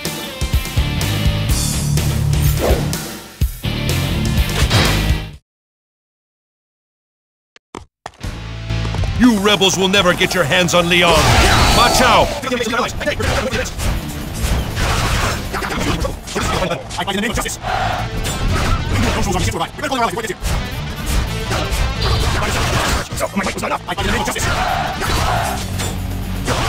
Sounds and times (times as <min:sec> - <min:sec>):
Music: 0:00.0 - 0:05.4, 0:08.2 - 0:26.6
Speech: 0:09.2 - 0:13.7, 0:15.6 - 0:17.6, 0:18.9 - 0:20.4, 0:22.0 - 0:24.5.